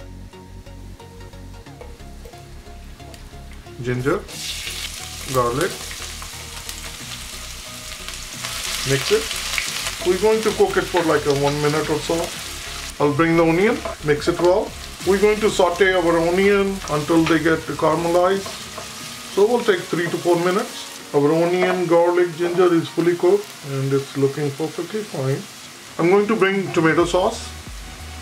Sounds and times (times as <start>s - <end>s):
Music: 0.0s - 28.2s
Speech: 3.8s - 4.3s, 5.3s - 5.9s, 8.8s - 9.3s, 10.0s - 12.4s, 13.0s - 18.5s, 19.3s - 27.6s.